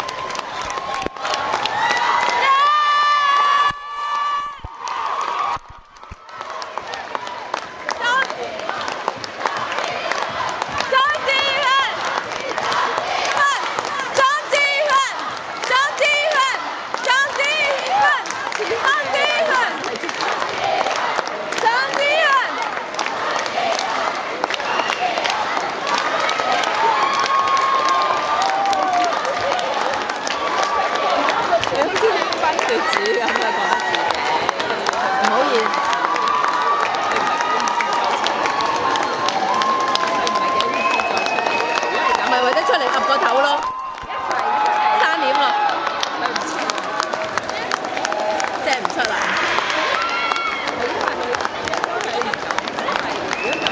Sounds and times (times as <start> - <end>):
Speech: 13.4 - 20.0.